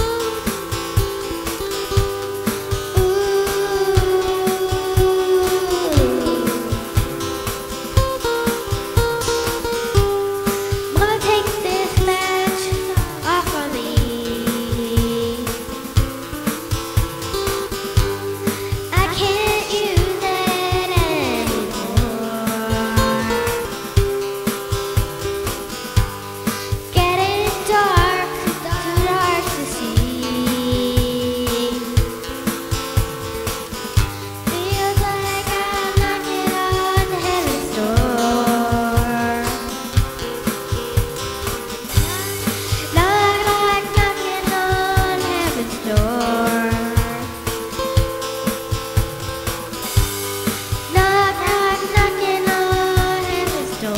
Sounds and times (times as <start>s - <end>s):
Music: 0.0s - 53.9s.